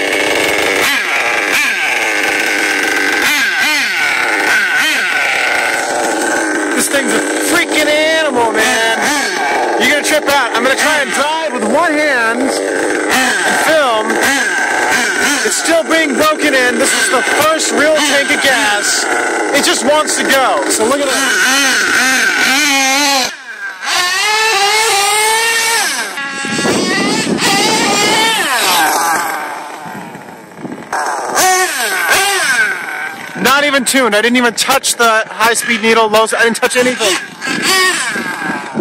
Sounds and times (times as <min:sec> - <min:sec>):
Speech: 0:06.8 - 0:09.0, 0:09.8 - 0:12.6, 0:15.5 - 0:21.3, 0:33.4 - 0:37.2.